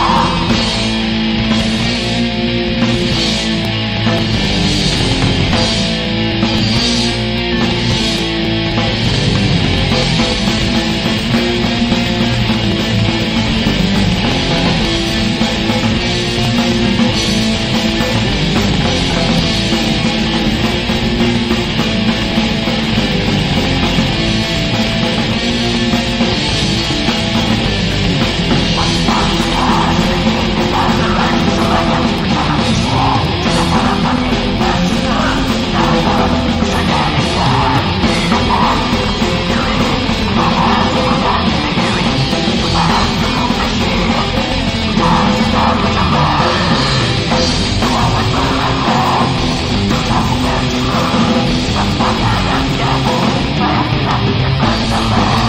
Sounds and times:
Music: 0:00.0 - 0:55.4.

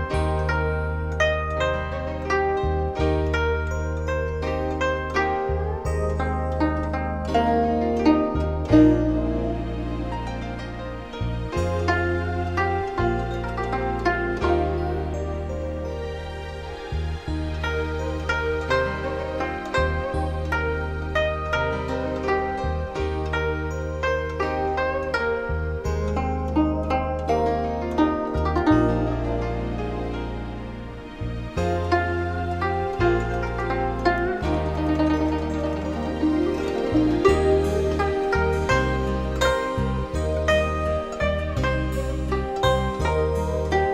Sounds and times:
New-age music: 0:00.0 - 0:43.9.

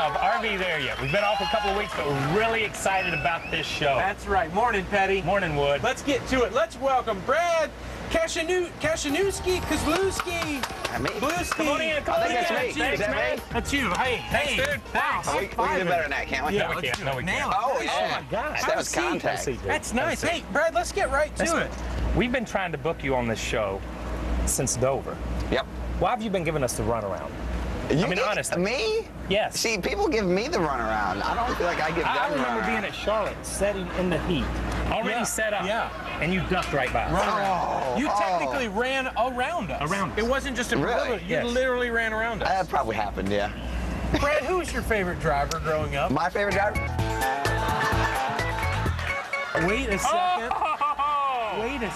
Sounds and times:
Music: 0:11.4 - 0:17.4, 0:46.2 - 0:50.1.

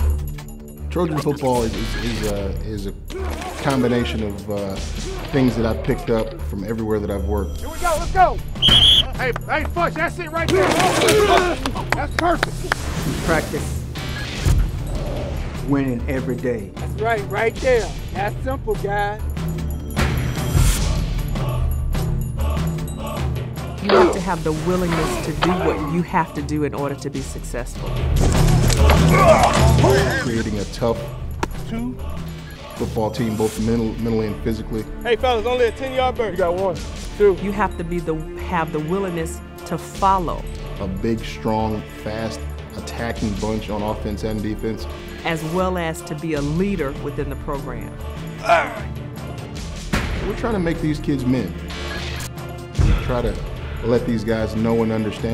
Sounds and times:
Music: 0:00.0 - 0:55.3.

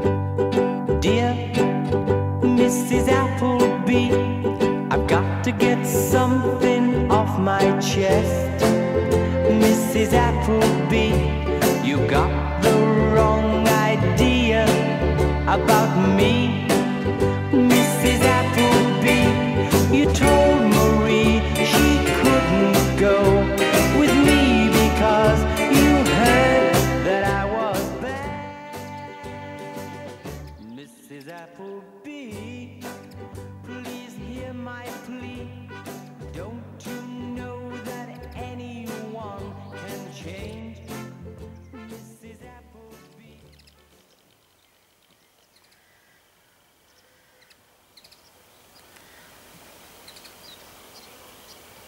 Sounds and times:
Music: 0:00.0 - 0:44.0
Male singing: 0:01.0 - 0:41.1, 0:41.8 - 0:43.6.

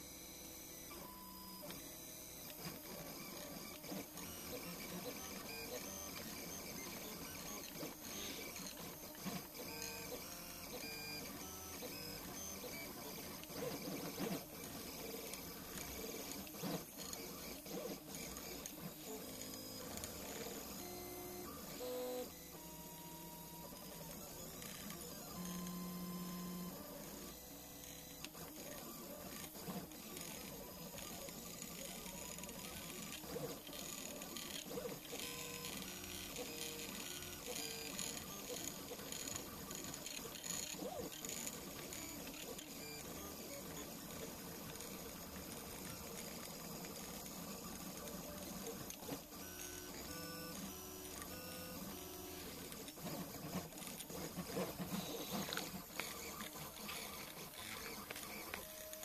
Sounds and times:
Printer: 0:00.0 - 0:59.0.

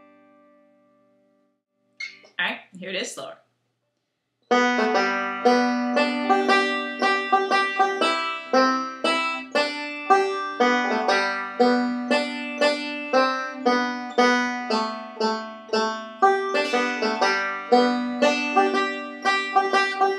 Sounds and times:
Music: 0:00.0 - 0:02.2, 0:04.5 - 0:20.1.

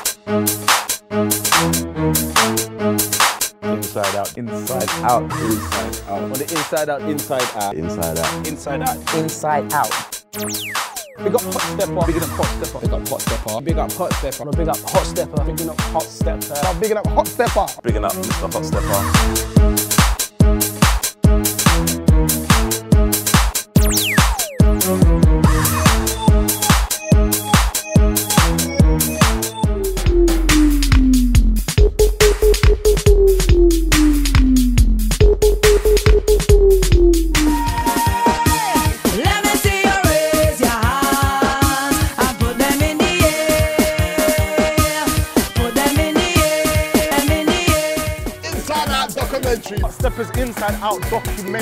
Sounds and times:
Music: 0:00.0 - 0:51.6.

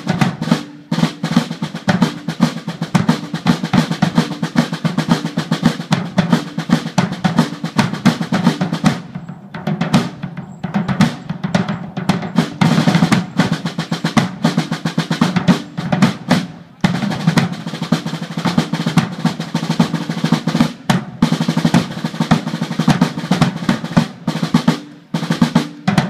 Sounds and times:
Drum roll: 0:00.0 - 0:26.0.

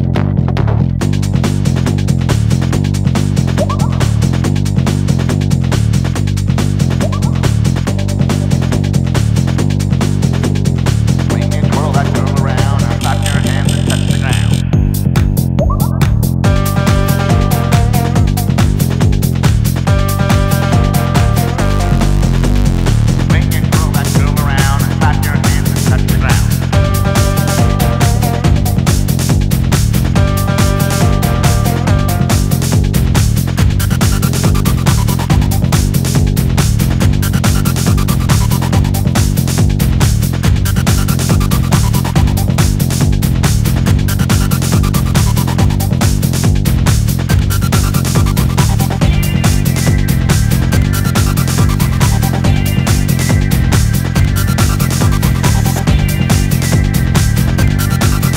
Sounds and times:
Exciting music: 0:00.0 - 0:58.3
Dance music: 0:00.1 - 0:58.3.

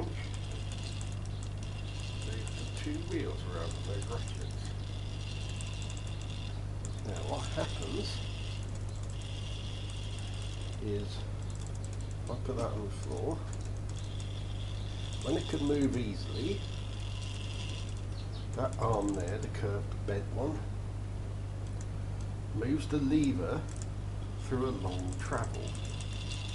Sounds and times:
Gears: 0:00.0 - 0:19.7, 0:22.8 - 0:26.5.

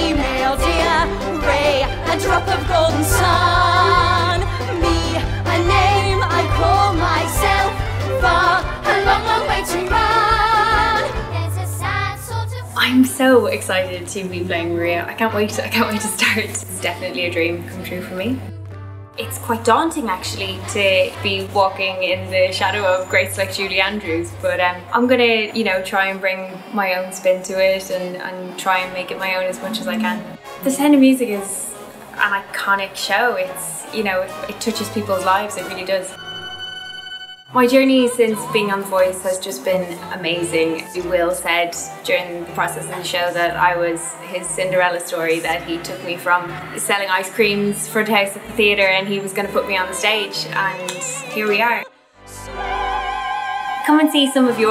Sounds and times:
Funny music: 0:00.0 - 0:25.9, 0:28.7 - 0:54.7.

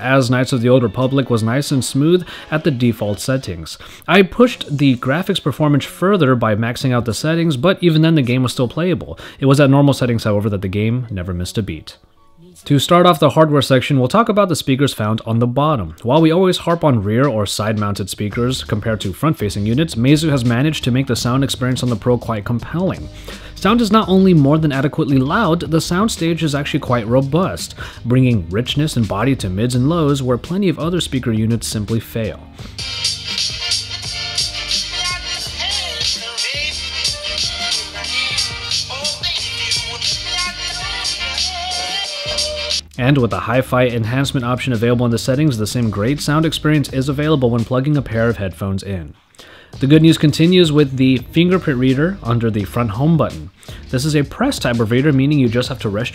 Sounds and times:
Speech: 0:00.0 - 0:32.5, 0:42.9 - 0:49.2, 0:49.8 - 0:56.1
Inside, small room: 0:00.0 - 0:56.1
Music: 0:00.0 - 0:56.1.

